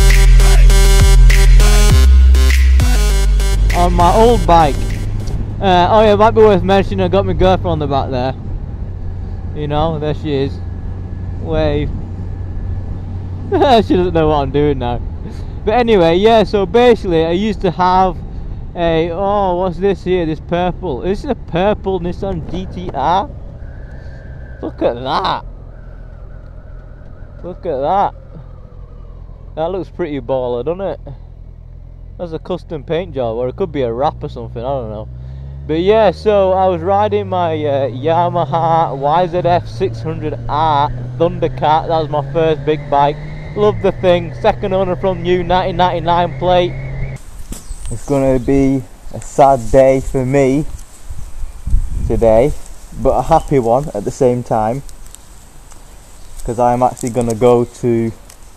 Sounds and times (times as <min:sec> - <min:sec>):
Vehicle: 0:00.0 - 0:58.5
Speech: 0:03.7 - 0:04.8, 0:05.6 - 0:08.4, 0:09.6 - 0:10.6, 0:11.4 - 0:11.9, 0:13.5 - 0:18.2, 0:18.8 - 0:23.3, 0:24.6 - 0:25.4, 0:27.4 - 0:28.2, 0:29.6 - 0:31.2, 0:32.2 - 0:35.1, 0:35.7 - 0:46.7, 0:47.9 - 0:50.7, 0:52.1 - 0:54.8, 0:56.4 - 0:58.2.